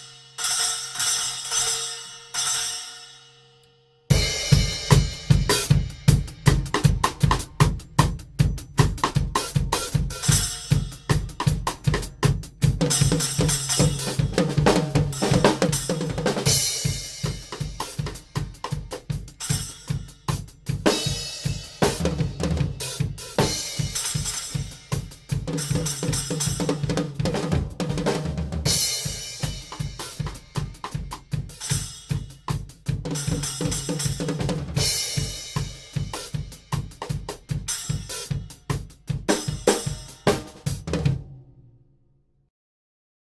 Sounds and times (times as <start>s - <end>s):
Hi-hat: 22.8s - 26.9s, 28.8s - 40.8s.